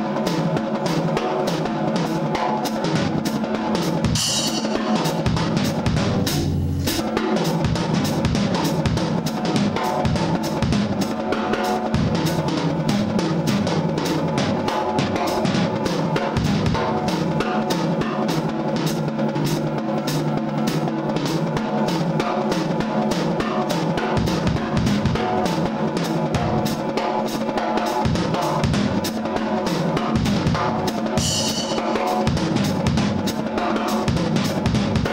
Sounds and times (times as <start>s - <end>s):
Music: 0.0s - 35.1s.